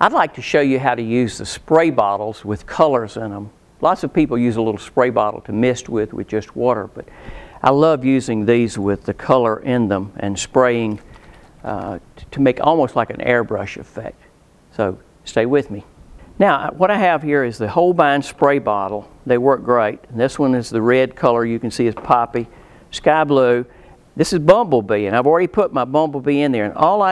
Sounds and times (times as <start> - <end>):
Speech: 0.0 - 11.0, 11.6 - 27.1.